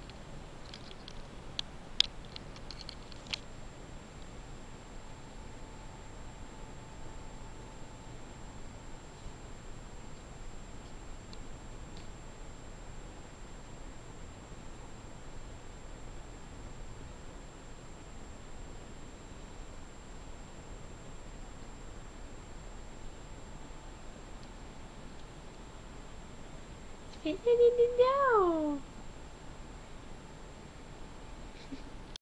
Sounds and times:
Speech: 0:27.2 - 0:28.9.

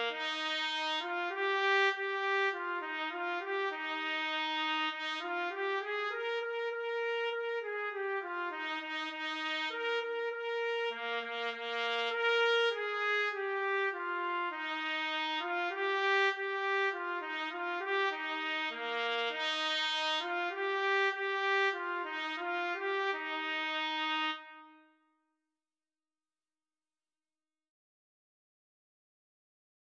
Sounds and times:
Trumpet: 0:00.0 - 0:25.0.

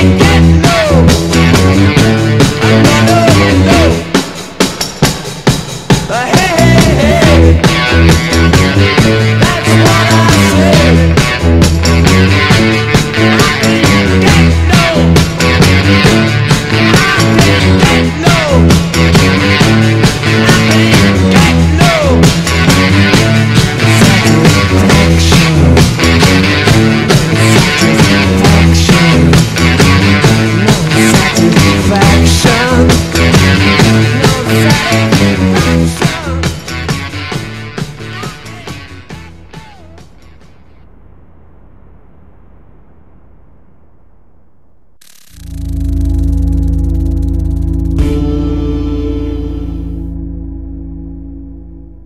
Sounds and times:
Ambient music: 0:45.4 - 0:52.0.

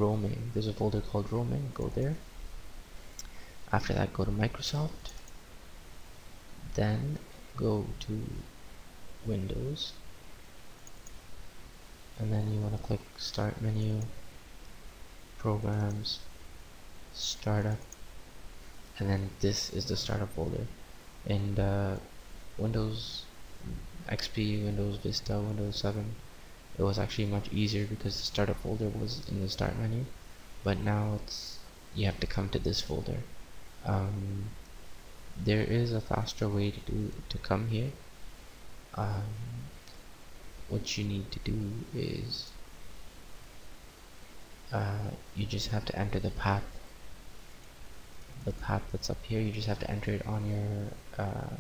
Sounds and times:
Speech: 0:00.0 - 0:02.2, 0:03.7 - 0:05.2, 0:06.7 - 0:08.5, 0:09.2 - 0:10.0, 0:12.2 - 0:14.2, 0:15.4 - 0:16.3, 0:17.2 - 0:17.9, 0:19.0 - 0:26.2, 0:26.8 - 0:34.6, 0:35.4 - 0:38.0, 0:39.0 - 0:39.8, 0:40.7 - 0:42.6, 0:44.7 - 0:46.8, 0:48.4 - 0:51.6
Clicking: 0:10.8 - 0:11.2.

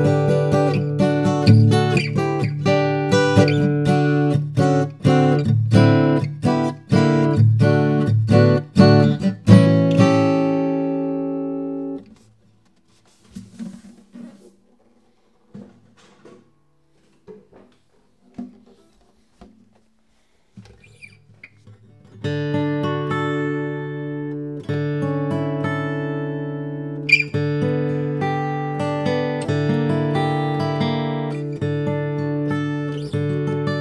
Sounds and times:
Music: 0:00.0 - 0:33.8.

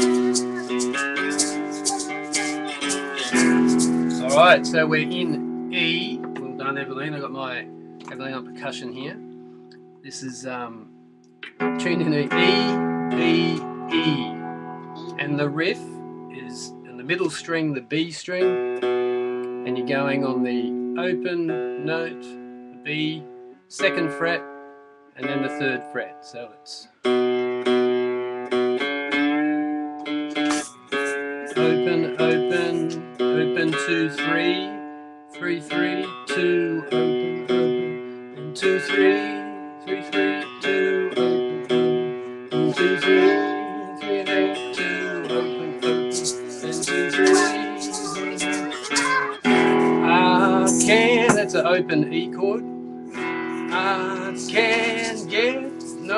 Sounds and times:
Guitar: 0:00.0 - 0:56.1
Speech: 0:04.1 - 0:09.2, 0:10.1 - 0:10.9, 0:11.8 - 0:14.4, 0:15.0 - 0:18.5, 0:19.7 - 0:22.3, 0:22.9 - 0:24.4, 0:25.2 - 0:26.9, 0:31.5 - 0:34.8, 0:35.4 - 0:36.9, 0:42.7 - 0:52.6, 0:53.7 - 0:56.1.

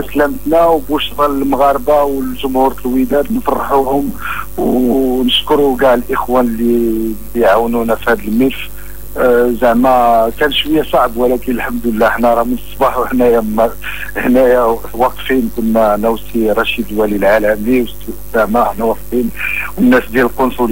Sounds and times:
Radio: 0:00.0 - 0:20.7
Speech: 0:00.0 - 0:20.7.

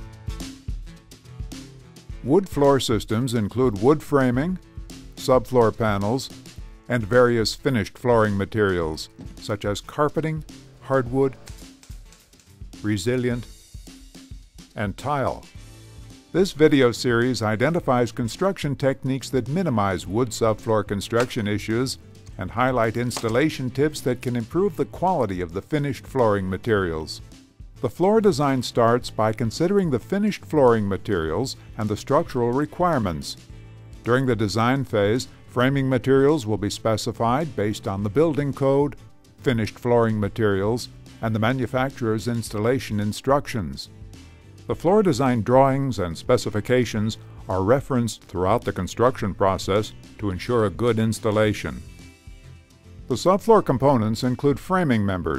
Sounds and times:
Music: 0:00.0 - 0:55.3
Speech: 0:02.2 - 0:04.6, 0:05.2 - 0:06.3, 0:06.9 - 0:11.4, 0:12.8 - 0:13.5, 0:14.8 - 0:15.5, 0:16.4 - 0:27.2, 0:27.8 - 0:33.4, 0:34.1 - 0:43.9, 0:44.7 - 0:51.8, 0:53.1 - 0:55.3.

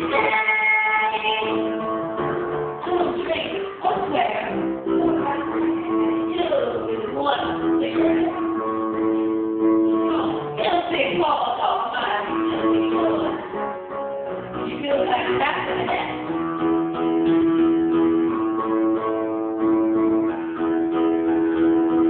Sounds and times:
Female singing: 0:00.0 - 0:01.7
Music: 0:00.0 - 0:22.0
Speech: 0:02.8 - 0:08.6, 0:10.0 - 0:13.5, 0:14.6 - 0:16.3.

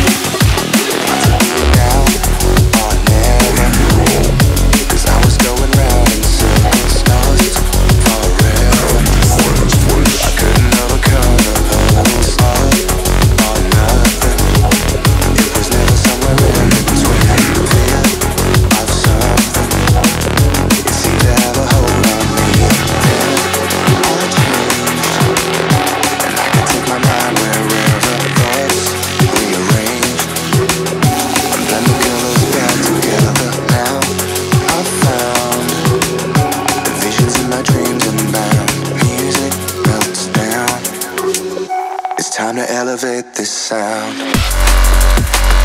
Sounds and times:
Drum and bass: 0:00.0 - 0:41.8, 0:44.1 - 0:45.6
Song: 0:00.6 - 0:42.8.

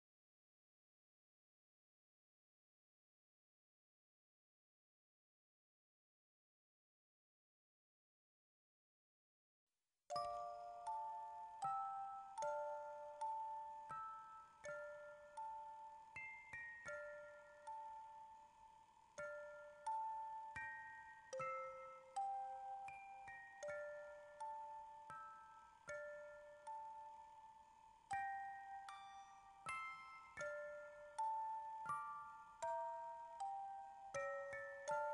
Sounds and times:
Glockenspiel: 0:10.1 - 0:35.1.

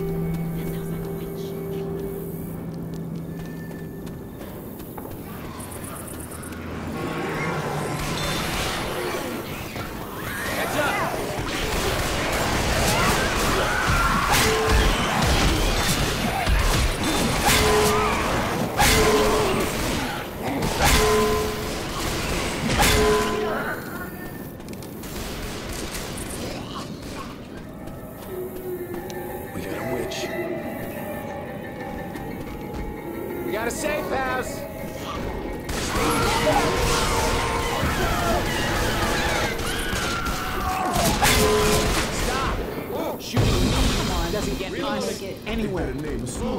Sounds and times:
Music: 0:00.0 - 0:04.6, 0:27.8 - 0:39.7.

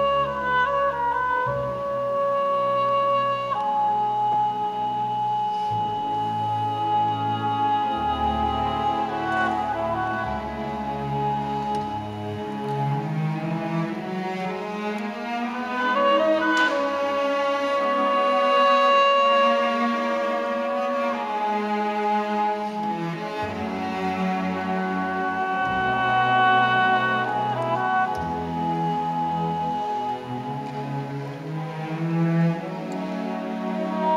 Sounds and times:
Musical instrument: 0:00.0 - 0:34.1
Soul music: 0:00.0 - 0:34.1.

